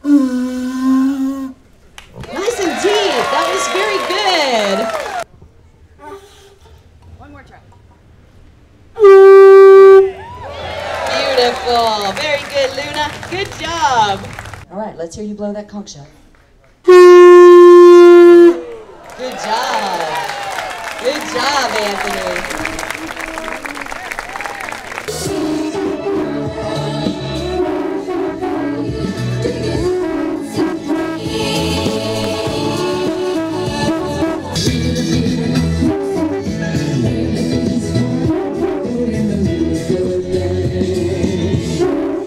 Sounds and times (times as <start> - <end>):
Music: 25.1 - 42.2.